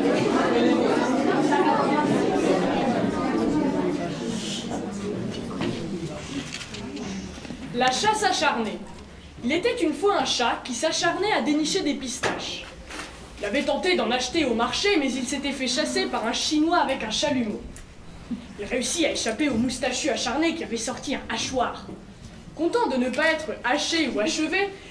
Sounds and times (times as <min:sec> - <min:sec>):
Female speech, woman speaking: 0:07.7 - 0:12.8, 0:13.4 - 0:17.7, 0:18.6 - 0:22.0, 0:22.6 - 0:24.9.